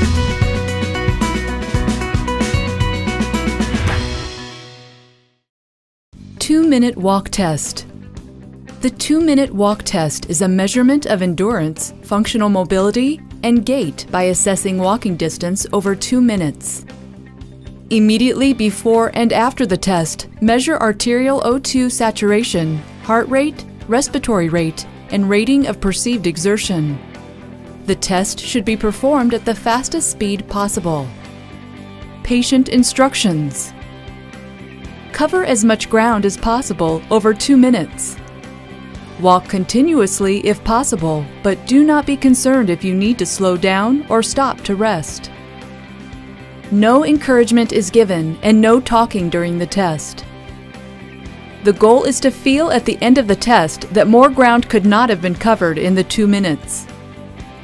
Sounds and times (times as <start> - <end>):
Music: 0.0 - 5.5, 6.2 - 57.6
Speech: 6.4 - 7.9, 8.8 - 16.8, 17.9 - 27.0, 27.9 - 31.1, 32.2 - 33.7, 35.2 - 38.2, 39.2 - 45.3, 46.7 - 50.2, 51.7 - 56.9.